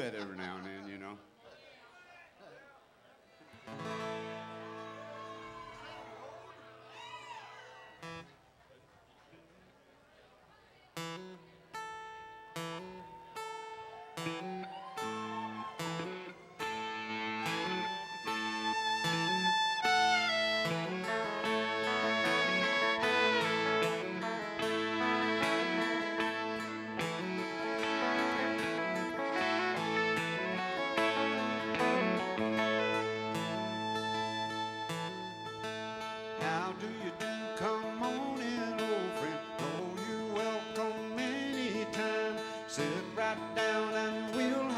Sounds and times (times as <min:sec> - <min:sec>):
Music: 0:03.6 - 0:06.9, 0:11.0 - 0:44.7.